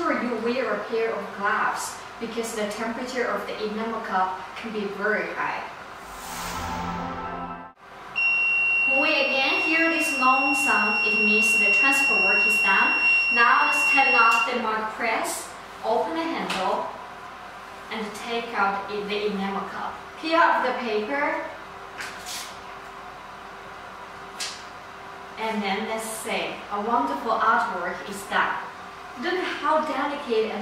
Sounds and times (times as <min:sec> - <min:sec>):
Speech: 0:00.0 - 0:05.7, 0:08.9 - 0:17.0, 0:17.9 - 0:21.6, 0:25.4 - 0:30.6.